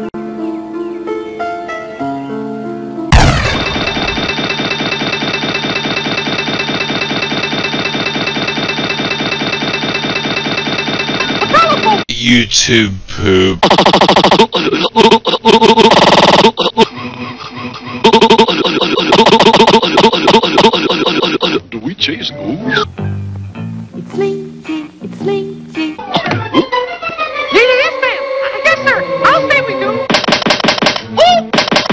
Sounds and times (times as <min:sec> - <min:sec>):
Music: 0:00.0 - 0:03.1, 0:16.9 - 0:18.1, 0:22.7 - 0:30.1.